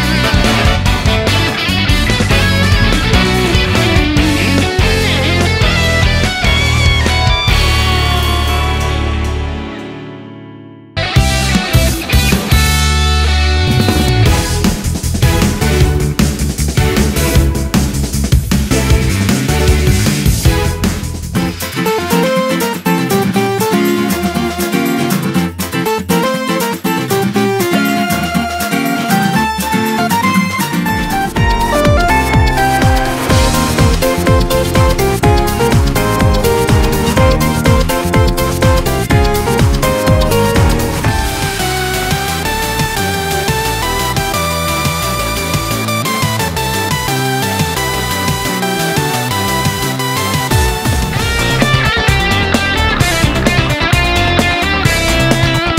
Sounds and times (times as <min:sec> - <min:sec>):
Music: 0:00.0 - 0:55.7.